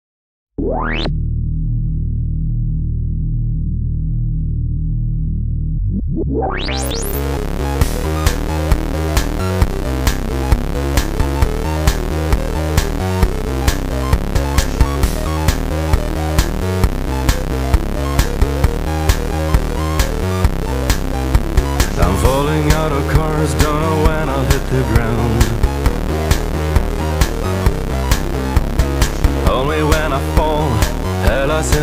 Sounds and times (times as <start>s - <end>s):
Music: 0.6s - 31.8s.